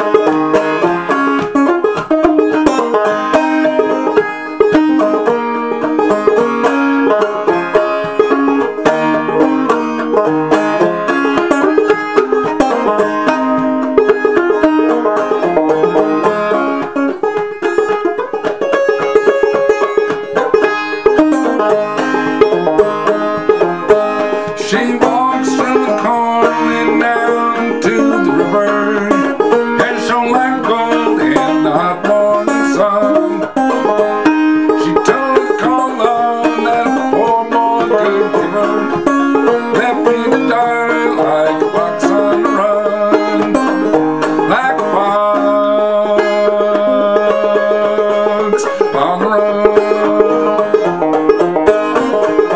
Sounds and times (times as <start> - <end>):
Music: 0.0 - 52.5.